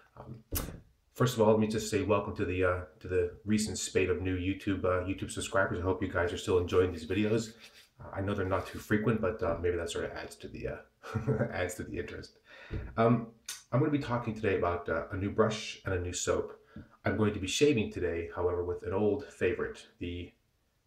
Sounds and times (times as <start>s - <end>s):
Speech: 0.0s - 0.5s, 1.2s - 20.4s.